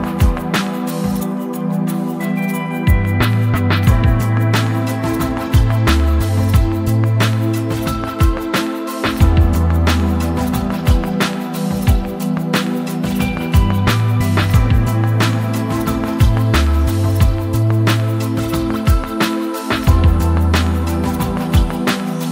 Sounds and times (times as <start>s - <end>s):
Music: 0.0s - 22.3s.